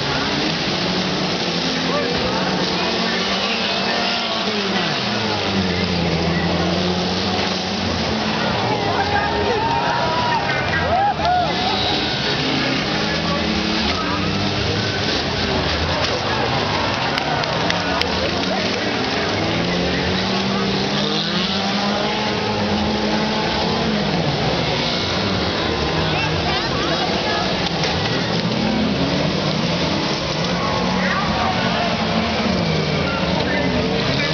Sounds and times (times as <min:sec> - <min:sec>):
Skidding: 0:00.0 - 0:34.3
Speech: 0:00.0 - 0:34.3.